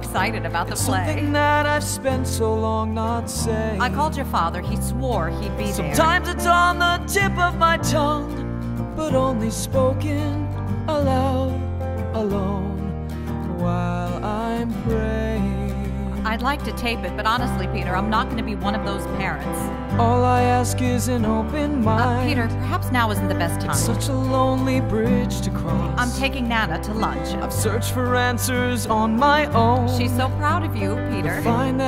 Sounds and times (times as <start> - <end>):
Music: 0.0 - 31.8.